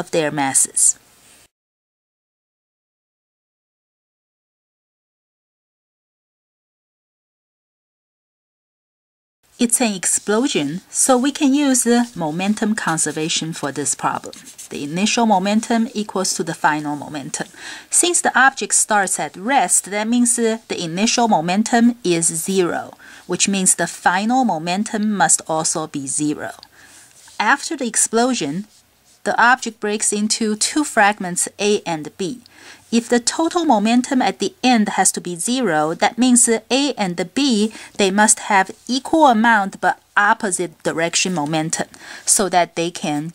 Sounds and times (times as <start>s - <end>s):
Speech: 0.0s - 1.0s, 9.6s - 26.7s, 27.3s - 43.3s.